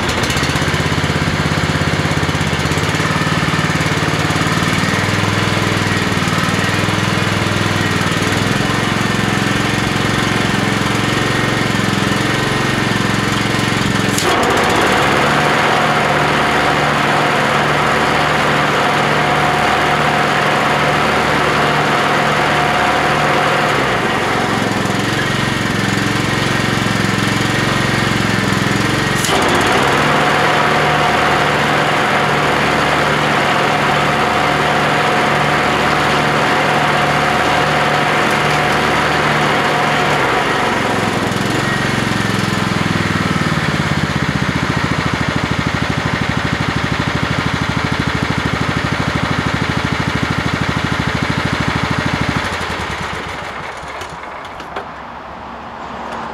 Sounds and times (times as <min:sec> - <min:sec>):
Lawn mower: 0:00.0 - 0:56.3
Vehicle: 0:00.0 - 0:56.3.